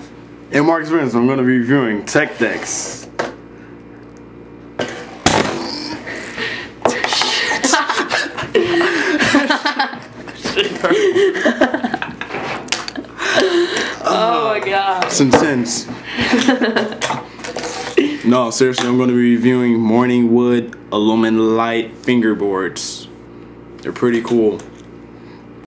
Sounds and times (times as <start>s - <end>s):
Speech: 0.5s - 3.1s, 18.3s - 23.2s, 23.8s - 24.7s.